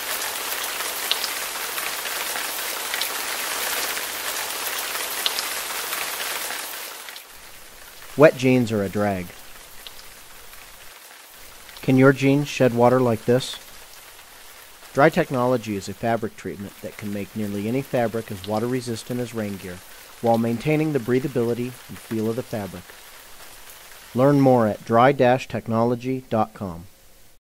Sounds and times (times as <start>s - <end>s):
Stream: 0.0s - 26.6s
Speech: 8.2s - 9.4s, 11.8s - 13.6s, 15.0s - 22.8s, 24.2s - 26.9s.